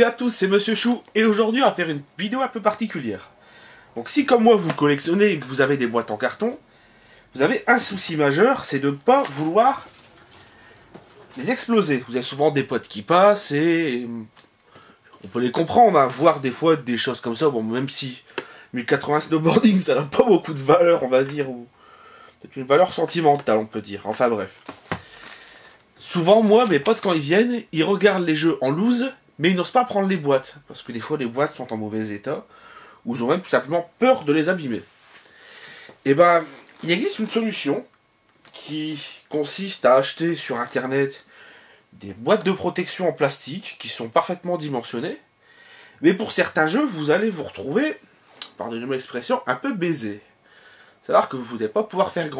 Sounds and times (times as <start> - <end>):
Speech: 0.0 - 3.3, 4.0 - 6.6, 7.4 - 10.0, 11.4 - 14.4, 15.2 - 21.7, 22.4 - 24.6, 26.0 - 34.9, 36.0 - 41.3, 42.0 - 45.3, 46.0 - 50.3, 51.0 - 52.4.